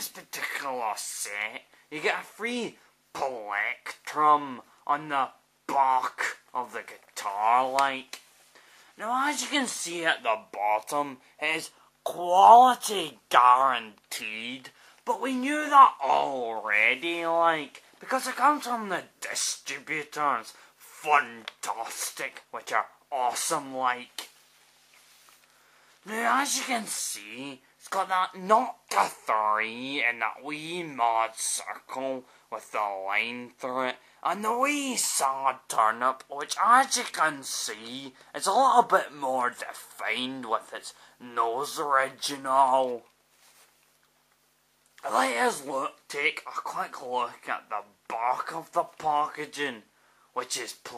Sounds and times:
Speech: 0:00.0 - 0:08.3, 0:09.0 - 0:24.4, 0:26.0 - 0:43.2, 0:45.0 - 0:50.9.

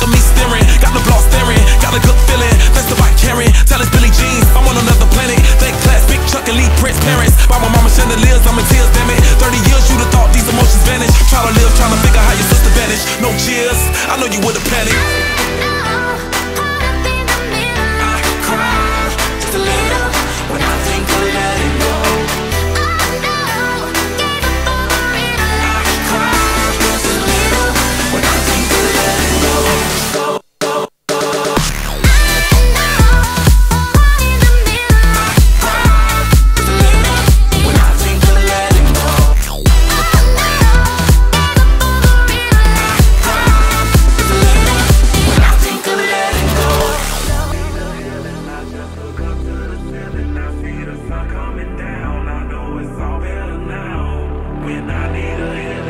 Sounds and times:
Exciting music: 0:00.0 - 0:55.8
Pop music: 0:00.0 - 0:55.8.

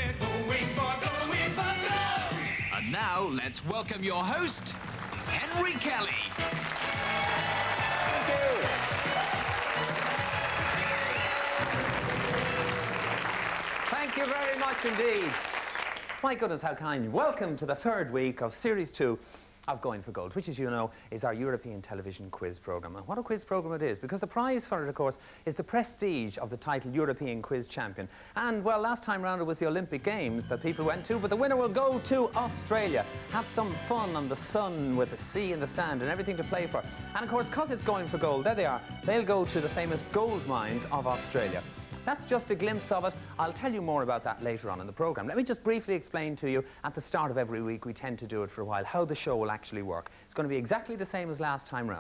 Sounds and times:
Music: 0:00.0 - 0:16.0, 0:29.5 - 0:45.3
Speech: 0:02.8 - 0:06.3, 0:13.9 - 0:15.4, 0:16.2 - 0:52.0.

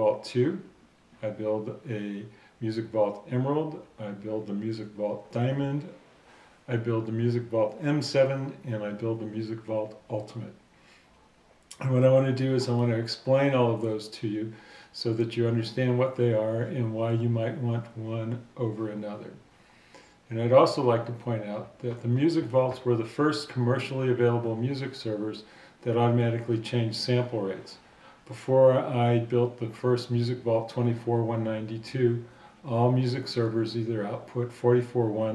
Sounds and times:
Speech: 0:00.0 - 0:06.0, 0:06.7 - 0:10.6, 0:11.7 - 0:19.4, 0:20.3 - 0:35.3.

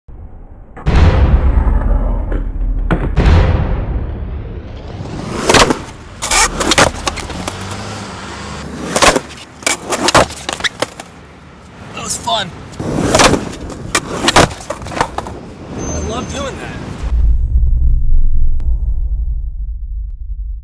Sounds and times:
Skateboard: 0:05.0 - 0:07.9, 0:08.6 - 0:11.1, 0:12.8 - 0:16.0.

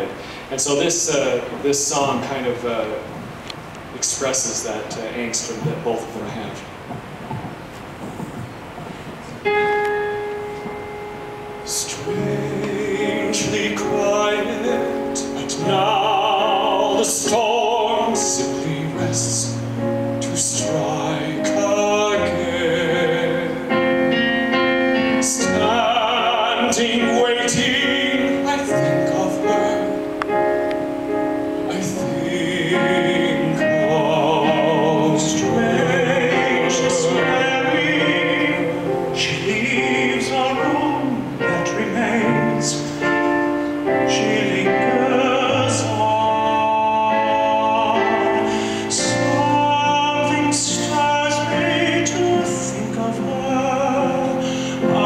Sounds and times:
Speech: 0:00.0 - 0:03.1, 0:04.0 - 0:06.7
Music: 0:06.9 - 0:55.0
Male singing: 0:11.7 - 0:23.8, 0:25.2 - 0:29.9, 0:31.7 - 0:43.2, 0:43.9 - 0:55.0.

